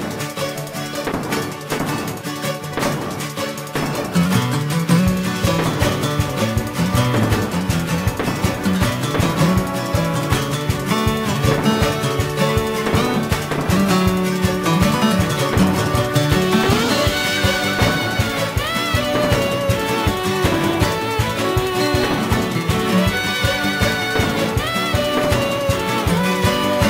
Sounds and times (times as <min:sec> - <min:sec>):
Music: 0:00.0 - 0:26.8.